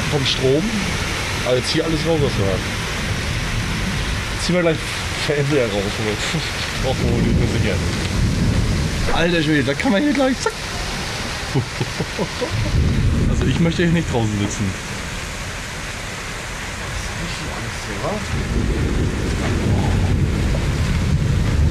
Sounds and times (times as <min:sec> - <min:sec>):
Rain: 0:00.0 - 0:21.7
Thunder: 0:06.8 - 0:09.6, 0:12.6 - 0:14.0, 0:18.2 - 0:21.7.